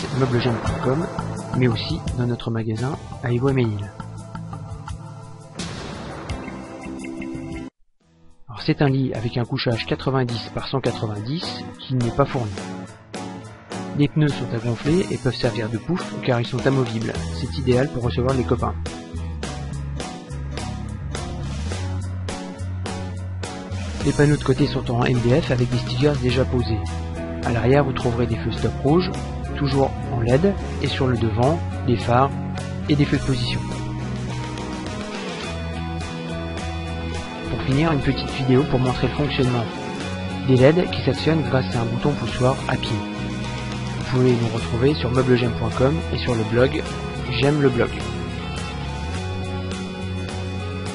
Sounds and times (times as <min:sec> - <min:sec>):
Speech: 0:00.0 - 0:04.0, 0:08.5 - 0:12.6, 0:14.0 - 0:18.8, 0:24.0 - 0:33.7, 0:37.5 - 0:39.7, 0:40.4 - 0:43.0, 0:44.0 - 0:48.1
Music: 0:00.0 - 0:50.9.